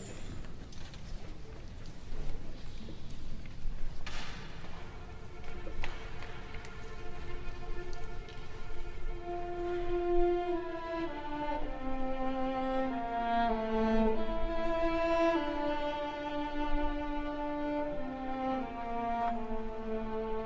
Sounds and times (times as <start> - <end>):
Orchestra: 2.3 - 20.4.